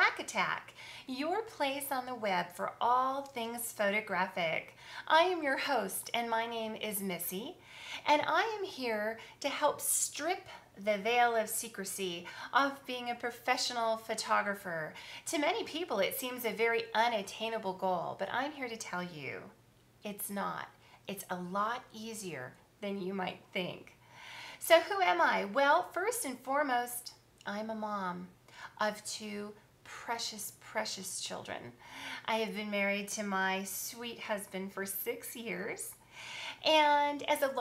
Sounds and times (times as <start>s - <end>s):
Speech: 0.0s - 23.9s, 24.6s - 36.0s, 36.6s - 37.6s.